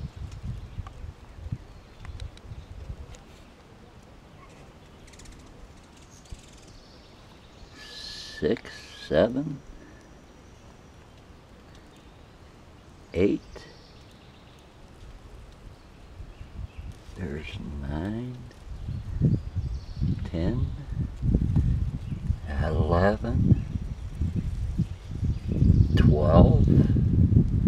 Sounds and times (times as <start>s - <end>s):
Speech: 7.8s - 9.6s, 13.1s - 13.8s, 17.2s - 18.5s, 20.2s - 20.9s, 22.4s - 23.4s, 26.0s - 26.9s.